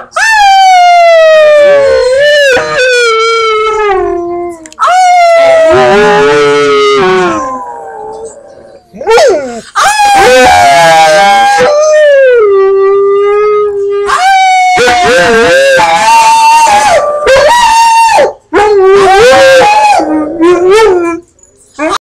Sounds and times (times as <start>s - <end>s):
Howl: 0.0s - 22.0s.